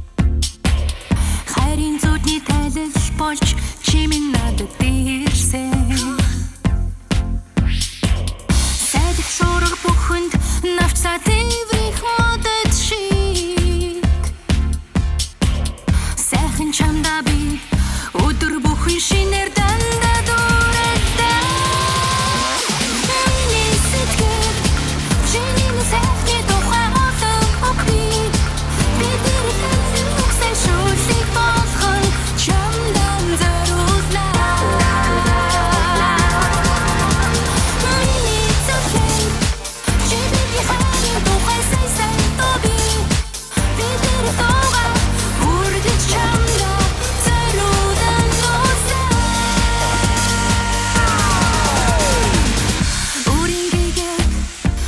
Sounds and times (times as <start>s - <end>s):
Music: 0.0s - 54.8s.